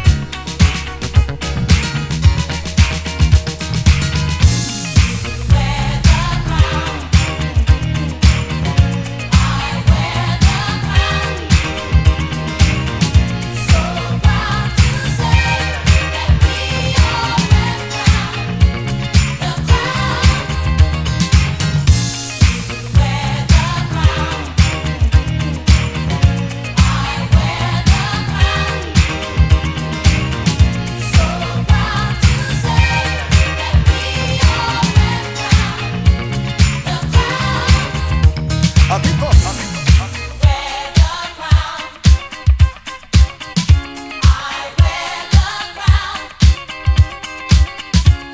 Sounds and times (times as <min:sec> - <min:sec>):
Disco: 0:00.0 - 0:48.3
Electronic music: 0:00.0 - 0:48.3
Funk: 0:00.0 - 0:48.3.